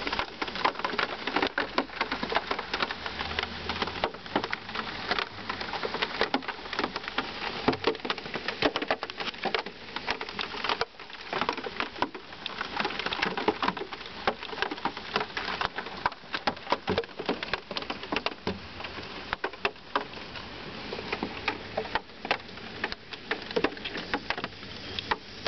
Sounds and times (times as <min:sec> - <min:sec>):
Rain on surface: 0:00.0 - 0:25.4.